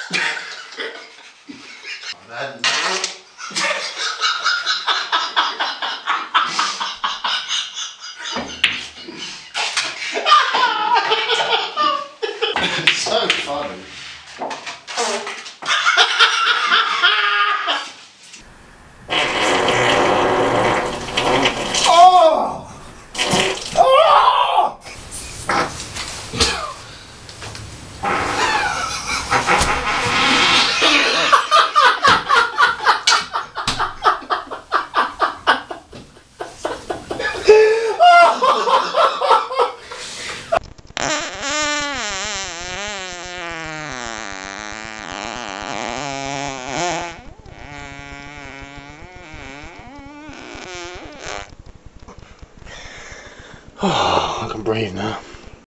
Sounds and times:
Speech: 0:02.2 - 0:03.2, 0:13.0 - 0:13.9, 0:54.4 - 0:55.3
Fart: 0:19.1 - 0:22.0, 0:23.1 - 0:23.8, 0:28.0 - 0:31.3, 0:40.6 - 0:53.9.

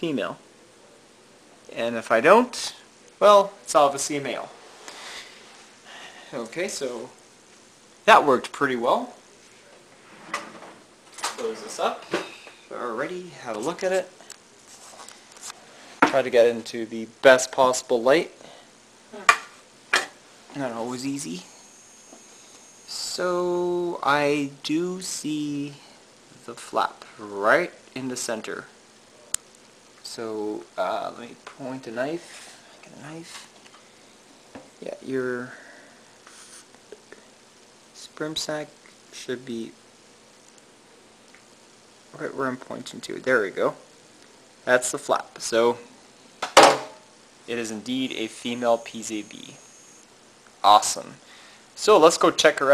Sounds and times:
Speech: 0:00.0 - 0:00.4, 0:01.7 - 0:04.6, 0:06.3 - 0:07.2, 0:08.1 - 0:09.8, 0:11.3 - 0:12.1, 0:12.7 - 0:14.2, 0:16.1 - 0:18.4, 0:20.5 - 0:21.5, 0:22.9 - 0:28.7, 0:30.0 - 0:33.5, 0:34.8 - 0:35.6, 0:38.0 - 0:39.8, 0:42.1 - 0:43.8, 0:44.6 - 0:45.9, 0:47.5 - 0:49.6, 0:50.6 - 0:51.2, 0:51.8 - 0:52.7
Inside, small room: 0:00.0 - 0:52.7.

